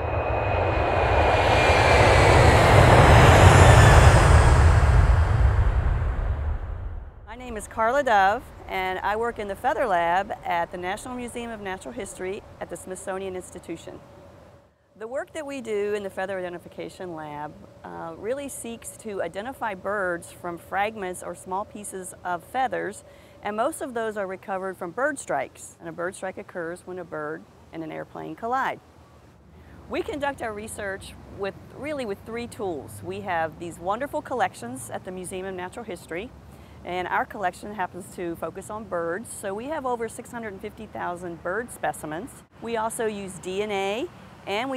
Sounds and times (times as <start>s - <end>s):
Speech: 7.3s - 14.0s, 15.0s - 28.8s, 29.9s - 44.7s.